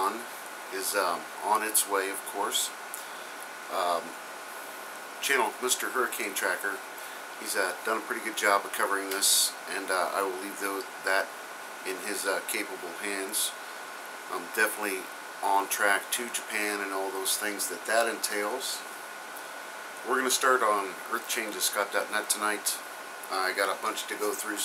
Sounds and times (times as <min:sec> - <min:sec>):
Speech: 0:00.0 - 0:02.8, 0:03.7 - 0:04.2, 0:05.2 - 0:06.8, 0:07.4 - 0:11.3, 0:11.9 - 0:13.6, 0:14.3 - 0:18.9, 0:20.0 - 0:24.6.